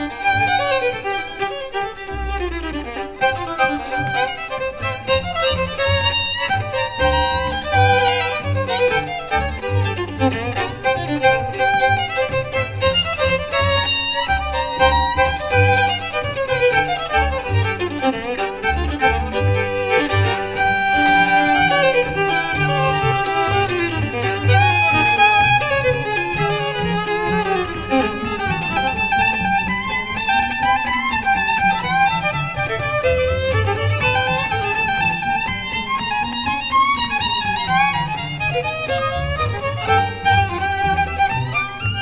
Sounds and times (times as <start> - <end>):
Orchestra: 0.0 - 42.0
Violin, fiddle: 0.0 - 42.0.